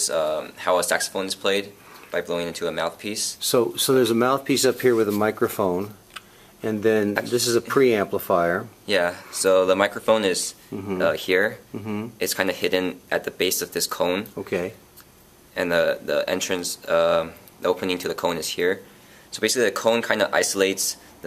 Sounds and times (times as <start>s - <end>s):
Speech: 0.0s - 6.0s, 6.6s - 14.8s, 15.6s - 21.2s.